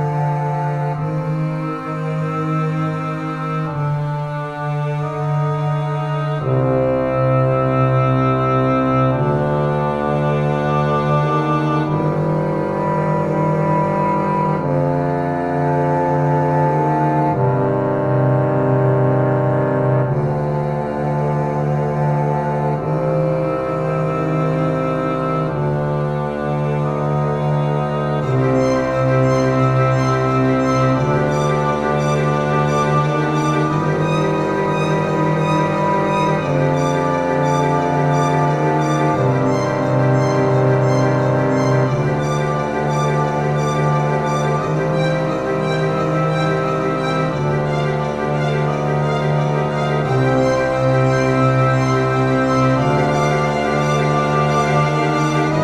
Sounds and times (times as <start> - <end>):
Cello: 0.0 - 55.6
Double bass: 0.0 - 55.6.